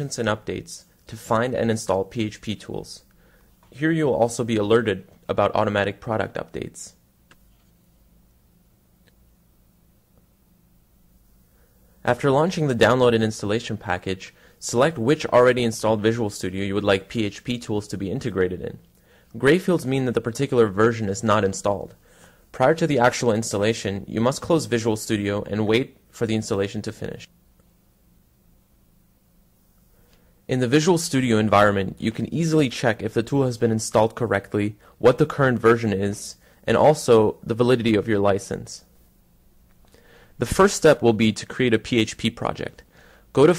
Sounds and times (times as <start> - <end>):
Speech: 0.0 - 3.1, 3.7 - 7.0, 12.0 - 27.3, 30.5 - 38.9, 40.4 - 43.5.